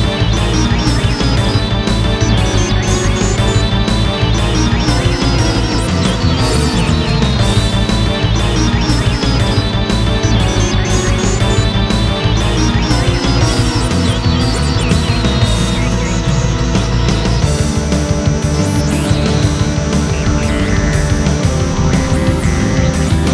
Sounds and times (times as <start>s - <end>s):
Soundtrack music: 0.0s - 23.3s.